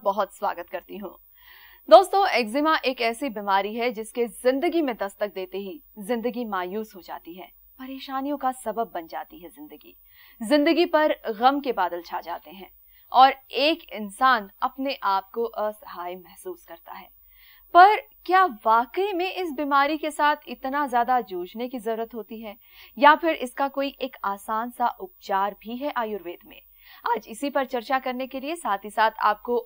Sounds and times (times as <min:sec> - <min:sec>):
Speech: 0:00.0 - 0:01.2, 0:01.9 - 0:17.1, 0:17.8 - 0:29.6.